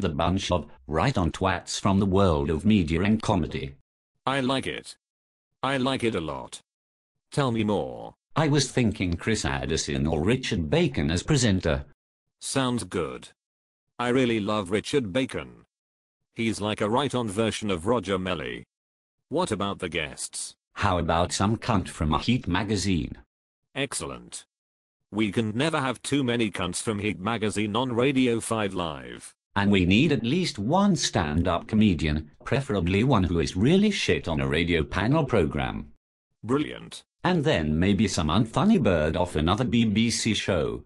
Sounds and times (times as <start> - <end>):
Speech: 0.0 - 5.0, 5.6 - 6.7, 7.3 - 13.4, 14.0 - 15.7, 16.4 - 18.7, 19.3 - 24.5, 25.1 - 40.8.